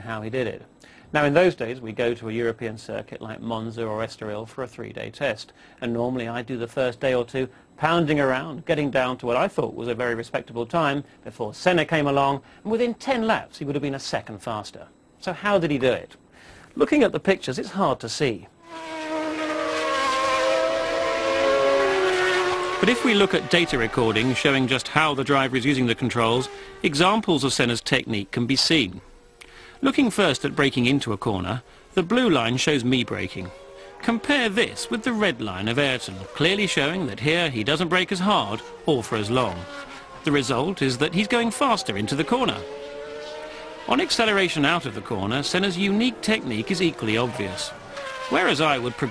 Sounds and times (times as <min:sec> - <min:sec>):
Speech: 0:00.0 - 0:16.2, 0:16.8 - 0:18.5, 0:22.8 - 0:29.0, 0:29.8 - 0:39.7, 0:40.3 - 0:42.7, 0:43.9 - 0:49.1
Car: 0:18.6 - 0:28.4, 0:29.0 - 0:29.4, 0:30.0 - 0:49.1
Accelerating, revving, vroom: 0:18.7 - 0:24.6, 0:35.8 - 0:37.0, 0:38.5 - 0:49.1.